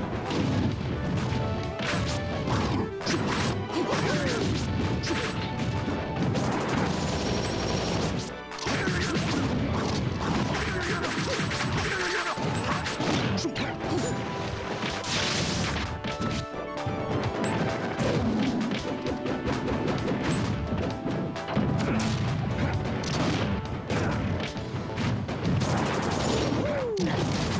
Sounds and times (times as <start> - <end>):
Whack, thwack: 0.2 - 7.0, 8.6 - 14.1, 14.7 - 16.4, 17.1 - 27.5.